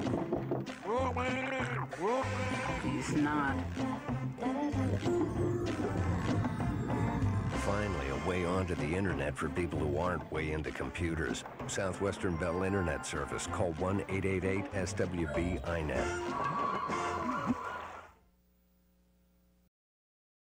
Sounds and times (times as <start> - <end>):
Music: 0.0 - 18.1
Speech: 7.6 - 16.2.